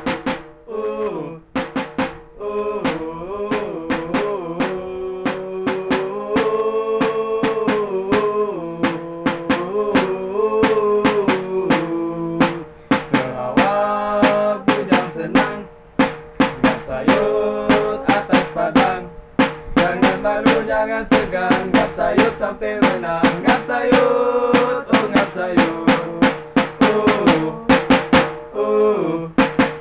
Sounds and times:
Music: 0.0s - 29.8s.

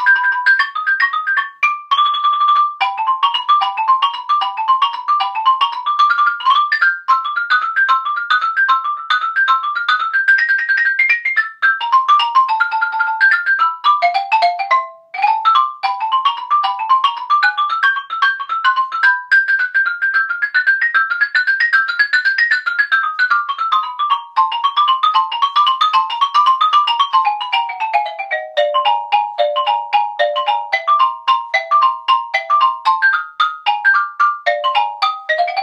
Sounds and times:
Percussion: 0.0s - 35.6s.

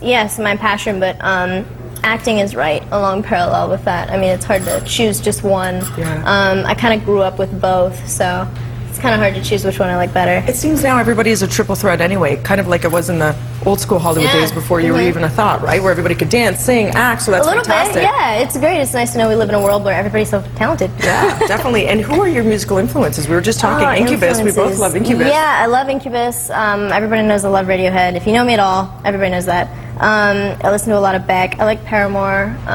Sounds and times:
Television: 0.0s - 32.7s
Speech: 6.0s - 7.2s.

